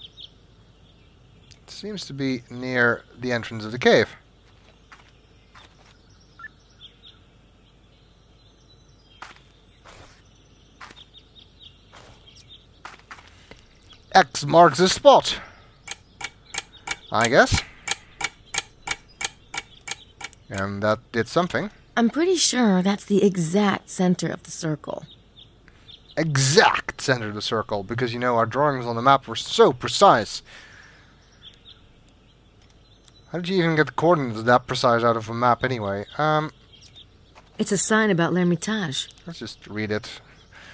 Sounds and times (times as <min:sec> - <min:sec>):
Environmental noise: 0:00.0 - 0:40.7.